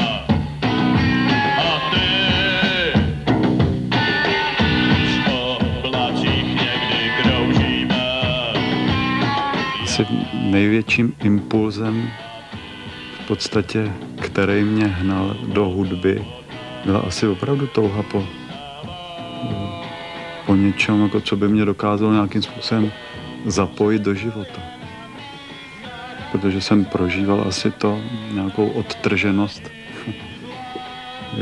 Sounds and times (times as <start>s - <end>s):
Blues: 0.0s - 31.4s
Speech: 9.8s - 12.2s, 13.3s - 18.3s, 19.2s - 19.8s, 20.5s - 24.7s, 26.3s - 30.2s.